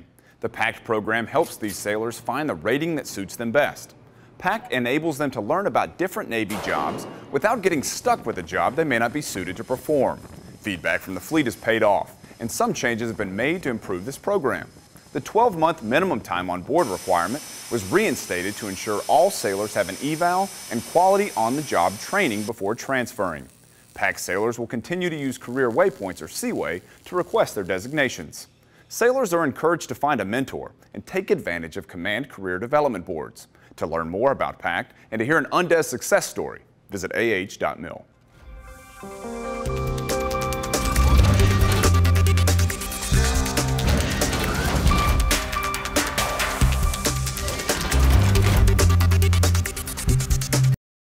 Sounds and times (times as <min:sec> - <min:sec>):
Speech: 0:00.0 - 0:38.1.